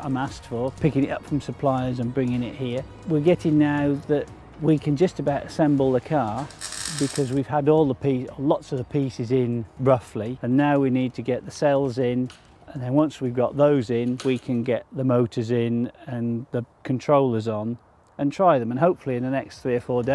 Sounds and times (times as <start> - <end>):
Speech: 0.0 - 20.1.